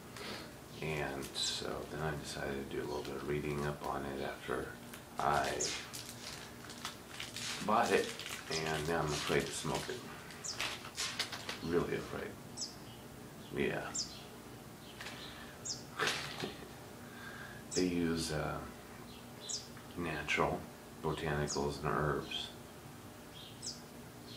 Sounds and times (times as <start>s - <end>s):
Speech: 0.8s - 5.9s, 7.6s - 10.0s, 11.6s - 12.4s, 13.5s - 14.0s, 17.8s - 18.7s, 20.0s - 22.6s.